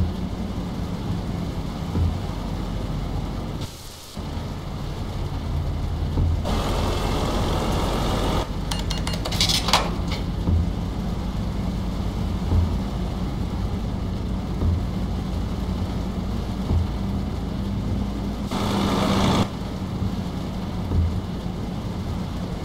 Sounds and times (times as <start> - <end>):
Truck: 0.0 - 22.6.